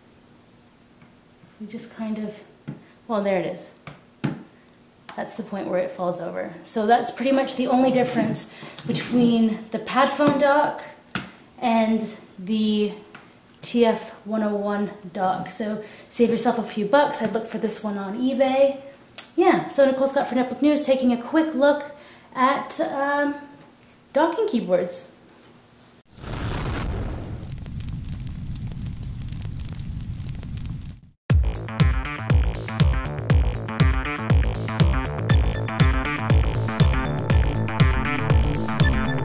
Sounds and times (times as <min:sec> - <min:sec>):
Music: 0:31.3 - 0:39.2.